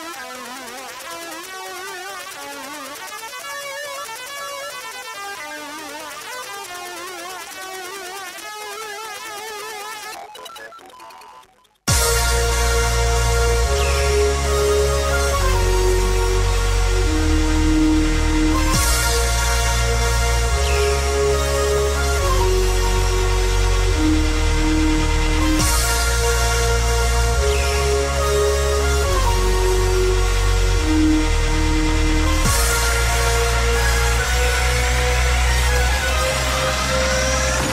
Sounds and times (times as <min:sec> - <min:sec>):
Dubstep: 0:00.0 - 0:37.7.